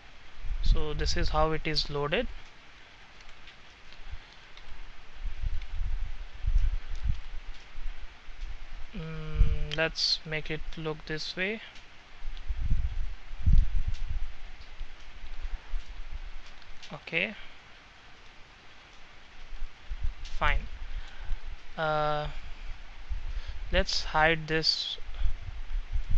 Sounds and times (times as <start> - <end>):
Speech: 0.7 - 2.3, 9.0 - 11.8, 16.9 - 17.5, 20.4 - 20.7, 21.8 - 22.4, 23.7 - 25.2.